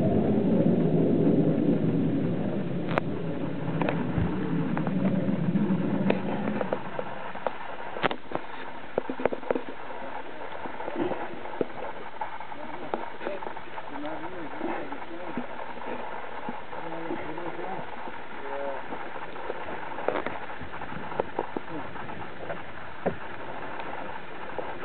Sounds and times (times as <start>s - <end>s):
Boat, Water vehicle: 0.0s - 24.8s
Speech: 12.5s - 16.0s, 16.8s - 18.8s.